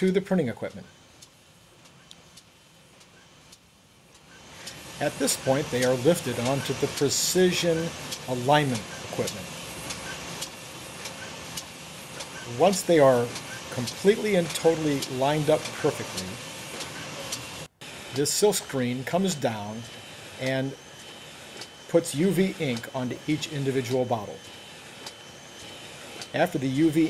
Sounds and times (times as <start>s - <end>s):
Speech: 0.0s - 0.9s, 5.0s - 9.5s, 12.5s - 16.4s, 18.2s - 20.8s, 21.9s - 24.4s, 26.3s - 27.1s.